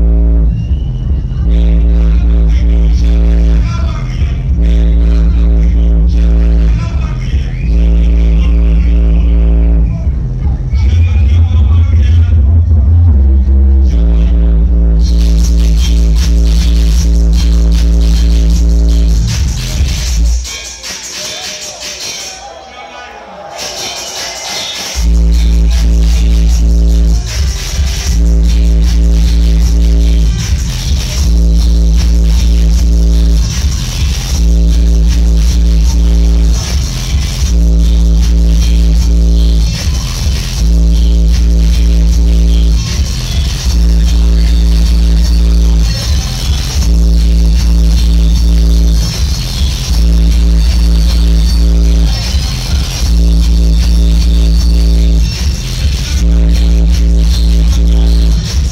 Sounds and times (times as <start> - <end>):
Music: 0.0 - 58.7.